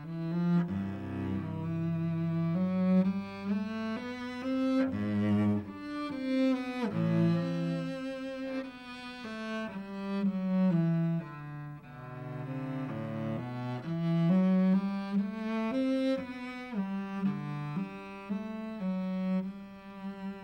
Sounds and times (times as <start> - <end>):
Cello: 0.0 - 20.4
Double bass: 0.0 - 20.4.